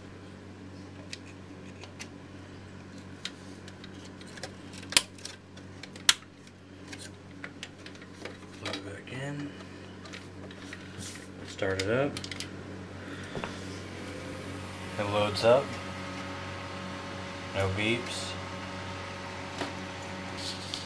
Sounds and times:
Speech: 0:08.6 - 0:09.6, 0:11.4 - 0:12.2, 0:15.0 - 0:15.8, 0:17.5 - 0:18.4.

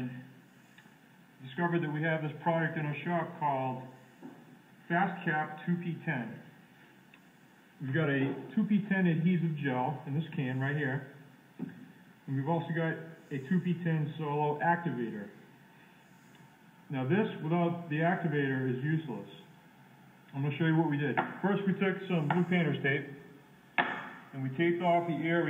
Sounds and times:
Speech: 0:00.0 - 0:00.3, 0:01.4 - 0:03.9, 0:04.9 - 0:06.4, 0:07.8 - 0:11.1, 0:12.3 - 0:15.4, 0:16.9 - 0:19.5, 0:20.3 - 0:23.2, 0:24.4 - 0:25.4.

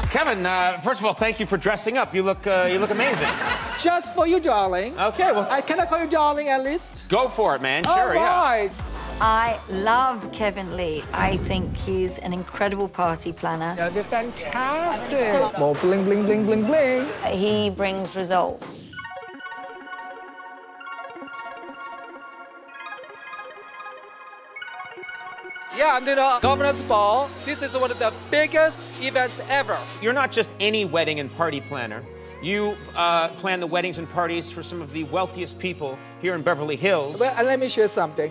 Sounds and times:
Music: 0:00.0 - 0:38.3.

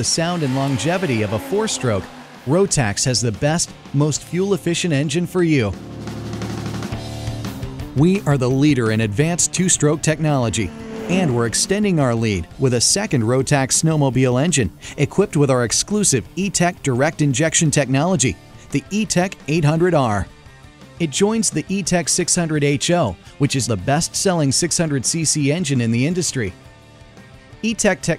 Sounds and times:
Speech: 0:00.0 - 0:05.8, 0:08.0 - 0:20.3, 0:21.0 - 0:26.6, 0:27.6 - 0:28.1
Music: 0:00.0 - 0:28.1.

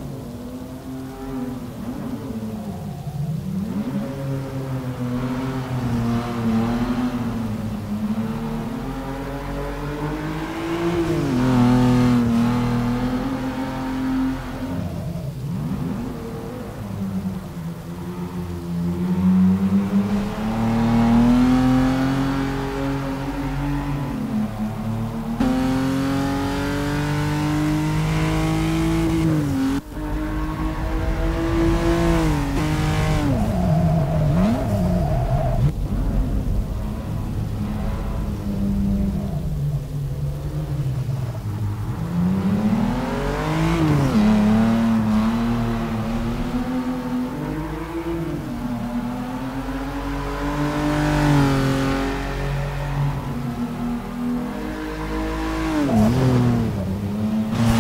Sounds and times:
Race car, auto racing: 0:00.0 - 0:57.8.

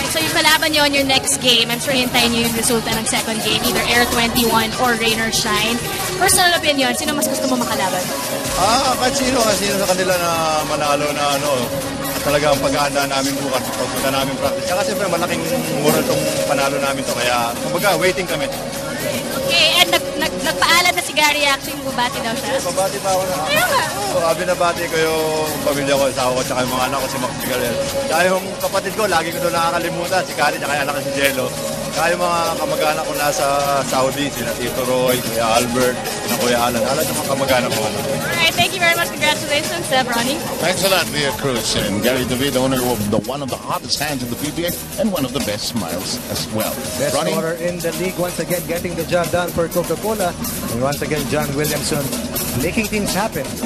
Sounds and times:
Hubbub, speech noise, speech babble: 0:00.0 - 0:53.6
Music: 0:00.0 - 0:53.6
Speech: 0:25.5 - 0:53.6.

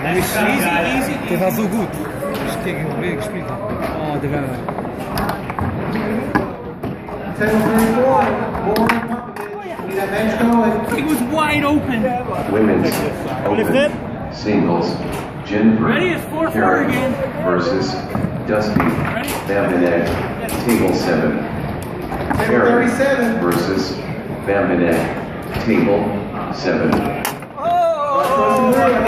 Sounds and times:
Inside, large room or hall: 0:00.0 - 0:29.0.

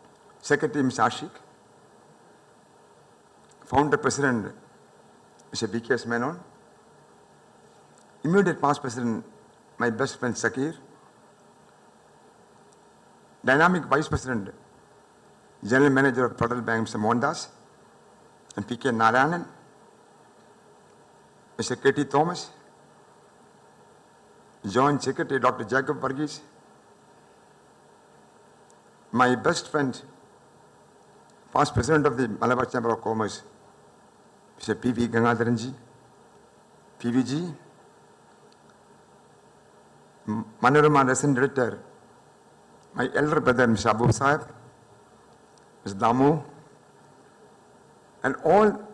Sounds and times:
Narration, monologue: 0:00.0 - 0:48.9
Male speech, man speaking: 0:00.4 - 0:01.5, 0:03.7 - 0:04.6, 0:05.6 - 0:06.5, 0:08.2 - 0:10.8, 0:13.5 - 0:14.6, 0:15.6 - 0:17.6, 0:18.6 - 0:19.6, 0:21.6 - 0:22.6, 0:24.6 - 0:26.5, 0:29.2 - 0:30.1, 0:31.6 - 0:33.5, 0:34.6 - 0:35.8, 0:37.0 - 0:37.7, 0:40.3 - 0:41.9, 0:43.0 - 0:44.6, 0:45.9 - 0:46.6, 0:48.2 - 0:48.9.

